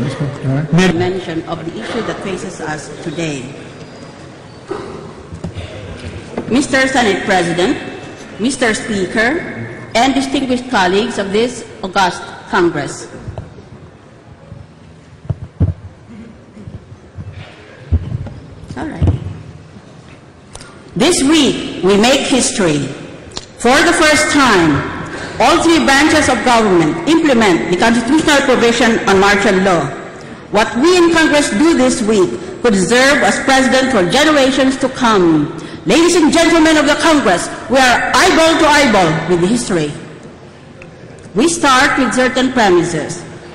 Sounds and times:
Narration, monologue: 0:00.0 - 0:16.0, 0:18.3 - 0:43.5
Female speech, woman speaking: 0:00.7 - 0:03.6, 0:06.5 - 0:13.2, 0:18.7 - 0:19.2, 0:21.0 - 0:23.0, 0:23.6 - 0:40.1, 0:41.3 - 0:43.3.

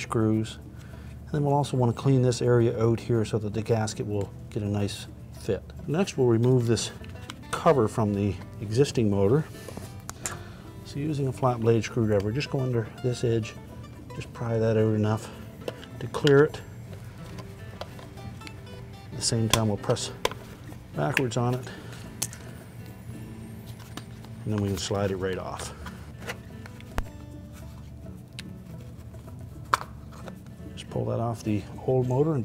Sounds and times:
Speech: 0:00.0 - 0:00.6, 0:01.3 - 0:09.5, 0:10.9 - 0:13.6, 0:14.2 - 0:15.3, 0:16.0 - 0:16.6, 0:19.2 - 0:20.2, 0:21.0 - 0:21.7, 0:24.4 - 0:25.8, 0:30.8 - 0:32.4
Music: 0:00.0 - 0:32.4.

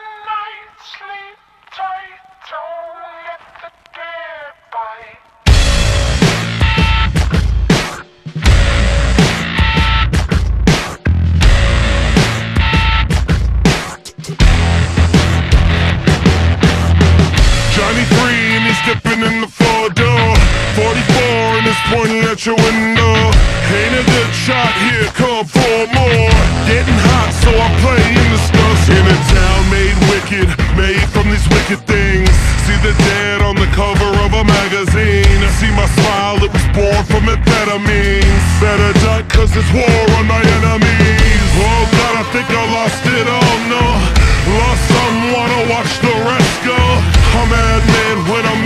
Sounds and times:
Angry music: 0:03.3 - 0:48.6.

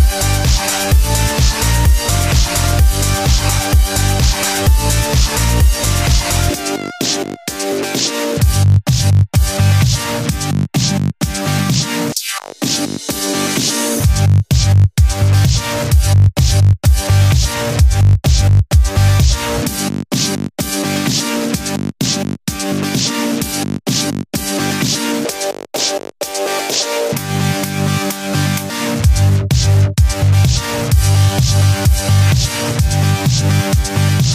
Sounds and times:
Dubstep: 0:00.0 - 0:34.3
Electronic dance music: 0:00.0 - 0:34.3.

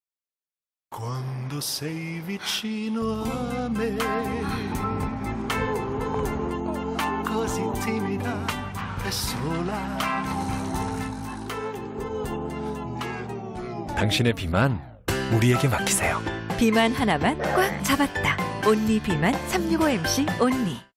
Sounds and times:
Music: 0:01.0 - 0:20.9
Speech: 0:14.0 - 0:16.2.

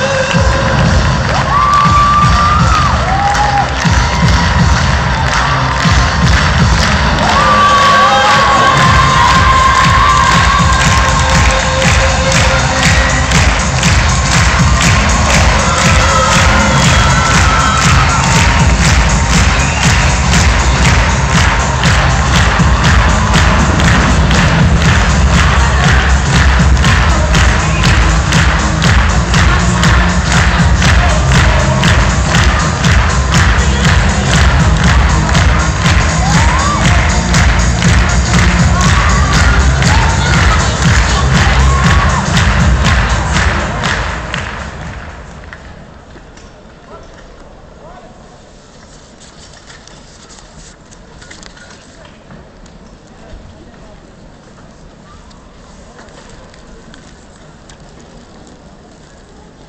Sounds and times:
Music: 0:00.0 - 0:45.8.

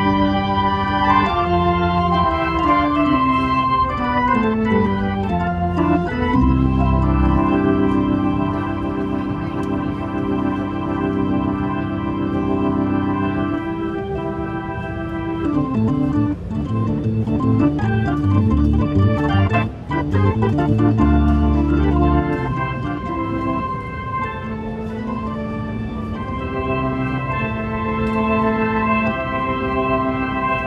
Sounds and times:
Keyboard (musical): 0:00.0 - 0:30.6.

